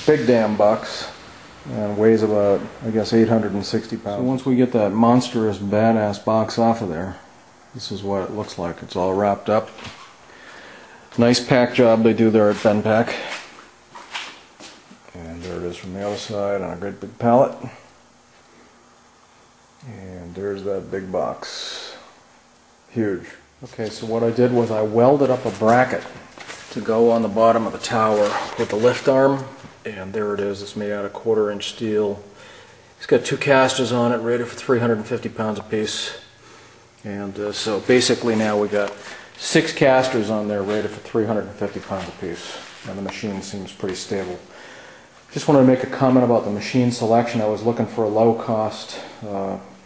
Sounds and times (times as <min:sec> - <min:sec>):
Speech: 0:00.0 - 0:09.9, 0:11.2 - 0:13.5, 0:15.1 - 0:17.8, 0:19.8 - 0:22.1, 0:22.9 - 0:32.3, 0:33.0 - 0:36.3, 0:37.0 - 0:44.5, 0:45.3 - 0:49.8.